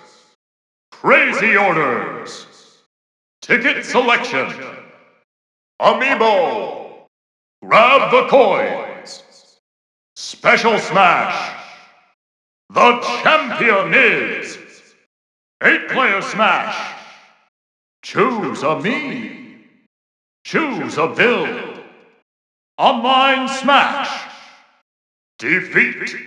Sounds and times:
Speech: 0:01.0 - 0:02.7, 0:03.4 - 0:04.8, 0:05.8 - 0:07.0, 0:07.6 - 0:09.6, 0:10.2 - 0:11.8, 0:12.7 - 0:14.8, 0:15.6 - 0:17.2, 0:18.0 - 0:19.4, 0:20.5 - 0:21.8, 0:22.8 - 0:24.6, 0:25.4 - 0:26.2.

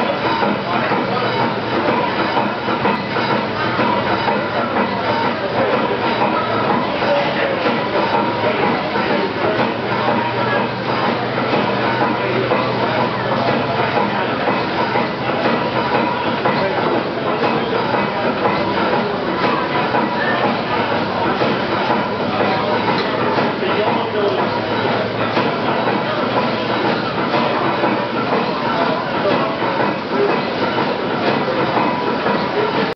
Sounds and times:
Heavy engine (low frequency): 0:00.0 - 0:32.9.

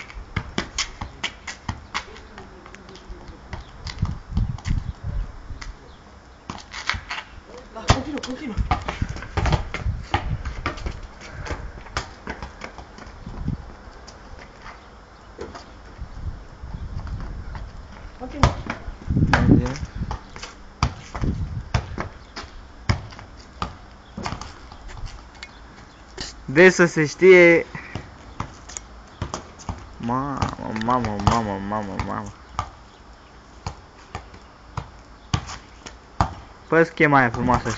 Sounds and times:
Speech: 0:30.0 - 0:32.3, 0:36.7 - 0:37.7.

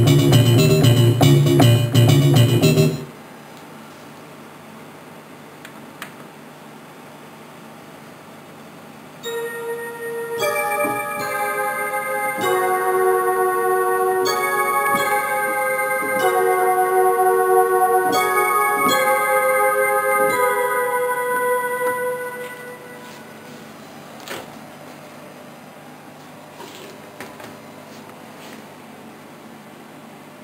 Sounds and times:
Piano: 0:00.0 - 0:03.1, 0:09.2 - 0:23.8
Synthesizer: 0:00.0 - 0:03.1, 0:09.2 - 0:23.8.

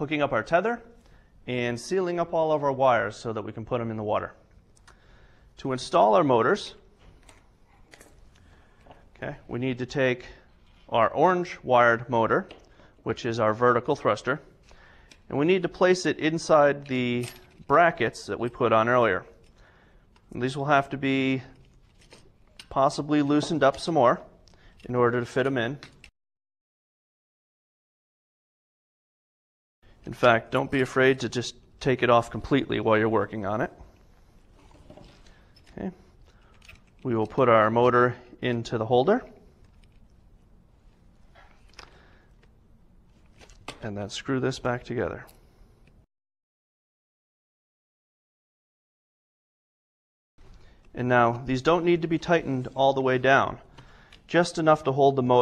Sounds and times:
Speech: 0:00.0 - 0:00.9, 0:01.5 - 0:04.4, 0:05.6 - 0:06.8, 0:09.2 - 0:14.5, 0:15.3 - 0:19.3, 0:20.3 - 0:21.6, 0:22.7 - 0:25.8, 0:30.1 - 0:33.9, 0:35.7 - 0:36.0, 0:37.0 - 0:39.4, 0:43.8 - 0:45.3, 0:51.0 - 0:53.6, 0:54.3 - 0:55.4.

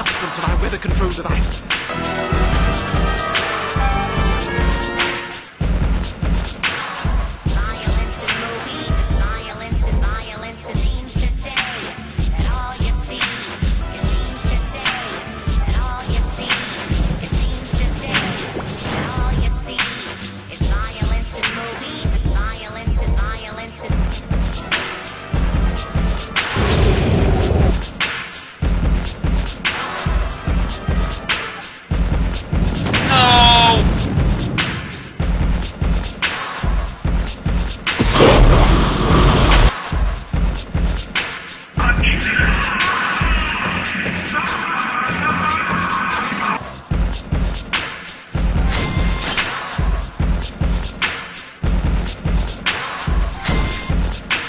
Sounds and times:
Music: 0:00.0 - 0:54.4.

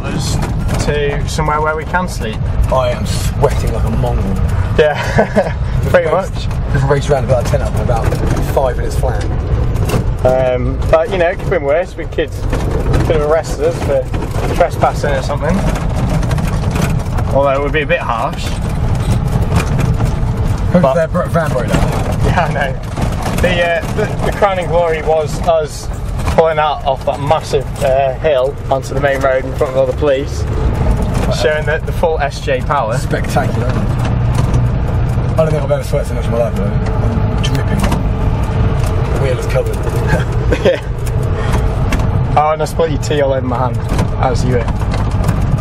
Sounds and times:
Speech: 0:00.0 - 0:05.0, 0:05.9 - 0:09.3, 0:13.1 - 0:15.6, 0:17.3 - 0:18.6, 0:23.4 - 0:30.4, 0:31.3 - 0:33.8, 0:35.4 - 0:36.8, 0:42.4 - 0:44.7
Car: 0:00.0 - 0:45.6.

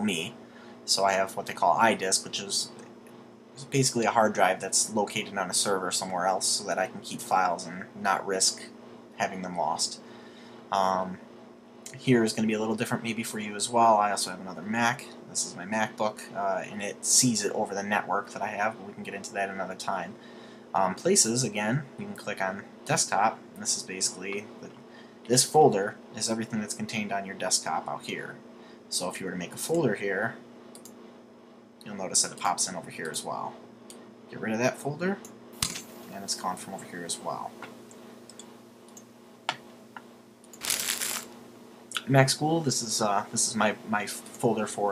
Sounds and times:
Speech: 0:00.0 - 0:02.8, 0:03.6 - 0:10.0, 0:10.7 - 0:11.2, 0:11.9 - 0:20.2, 0:20.8 - 0:30.4, 0:31.8 - 0:33.6, 0:34.3 - 0:35.2, 0:36.1 - 0:37.6, 0:41.9 - 0:44.9
Inside, small room: 0:00.0 - 0:44.9.

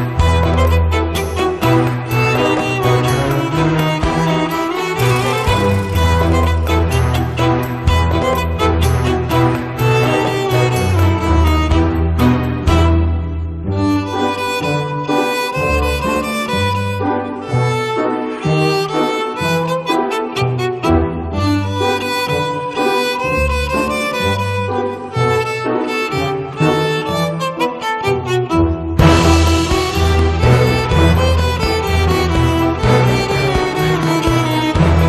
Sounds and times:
Double bass: 0:00.0 - 0:17.7, 0:28.5 - 0:35.0
Cello: 0:00.0 - 0:35.0.

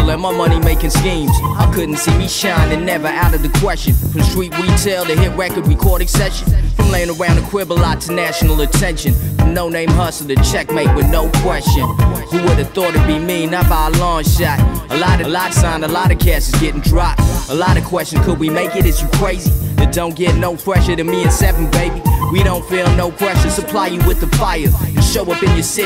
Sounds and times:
Music: 0:00.0 - 0:25.8.

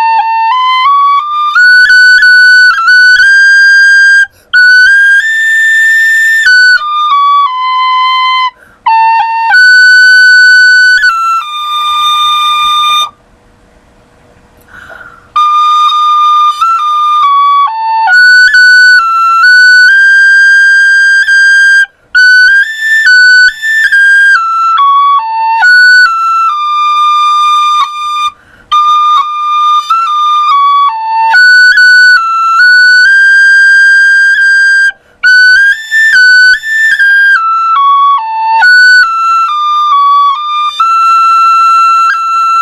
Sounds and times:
Music: 0:00.0 - 0:13.2, 0:14.6 - 0:42.6.

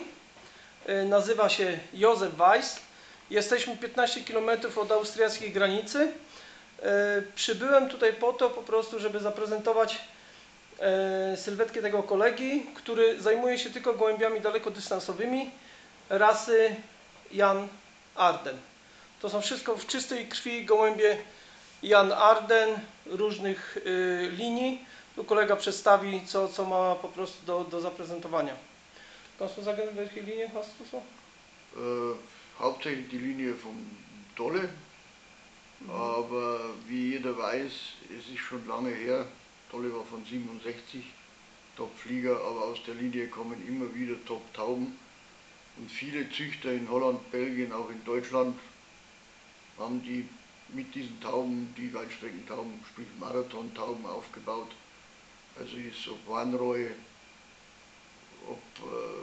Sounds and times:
Speech: 0:00.0 - 0:00.2, 0:00.8 - 0:10.2, 0:10.8 - 0:28.7, 0:29.4 - 0:34.9, 0:35.8 - 0:41.2, 0:41.8 - 0:45.0, 0:45.8 - 0:48.7, 0:49.8 - 0:54.8, 0:55.6 - 0:57.1, 0:58.4 - 0:59.2
Inside, small room: 0:00.0 - 0:59.2.

